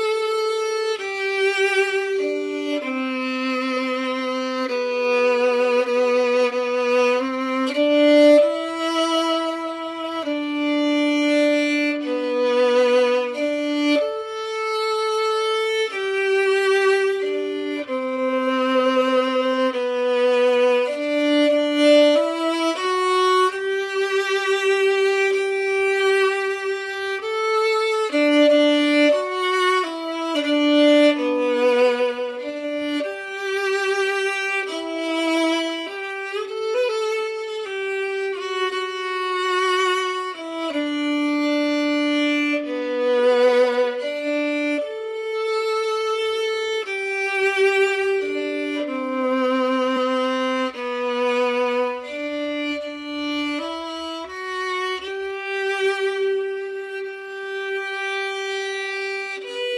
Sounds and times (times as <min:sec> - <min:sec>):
Sad music: 0:00.0 - 0:59.7
Violin, fiddle: 0:00.0 - 0:59.7.